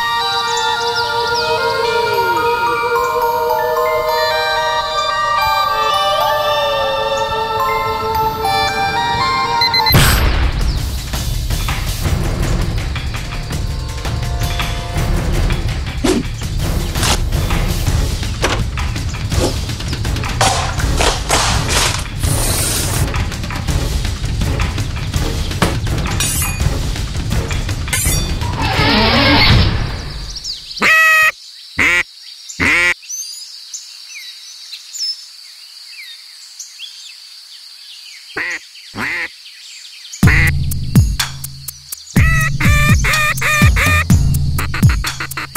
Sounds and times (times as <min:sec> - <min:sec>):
Music: 0:00.0 - 0:30.5, 0:40.2 - 0:45.5
Quack: 0:30.8 - 0:32.0, 0:32.6 - 0:33.0, 0:38.4 - 0:39.3, 0:43.1 - 0:44.0.